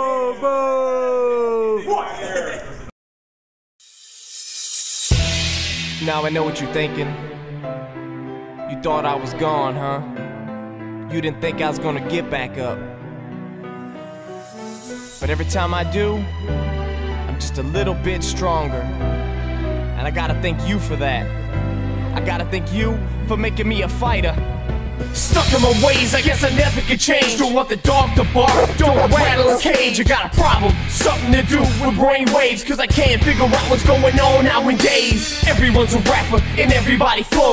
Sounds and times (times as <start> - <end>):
Music: 3.8 - 37.5.